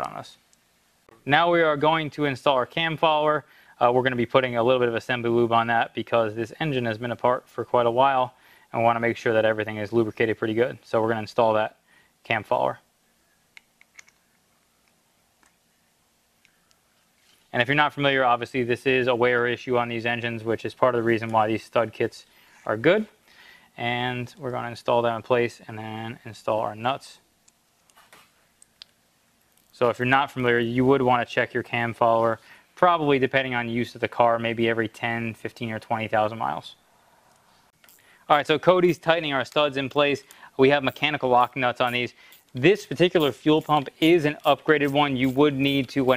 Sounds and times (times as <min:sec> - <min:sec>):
Speech: 0:00.0 - 0:00.4, 0:01.2 - 0:12.9, 0:17.5 - 0:23.2, 0:23.8 - 0:27.2, 0:29.8 - 0:36.8, 0:38.3 - 0:46.1.